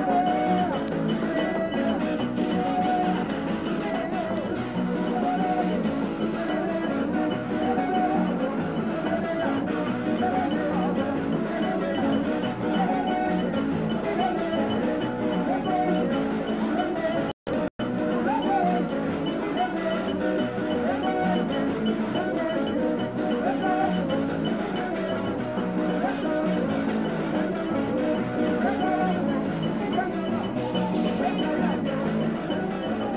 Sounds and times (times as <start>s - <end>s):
Folk music: 0.0s - 33.1s.